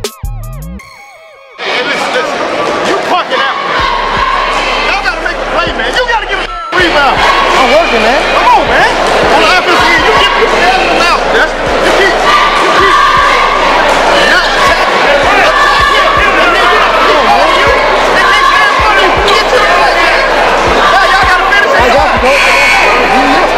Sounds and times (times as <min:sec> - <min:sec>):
Inside, public space: 0:00.0 - 0:23.5.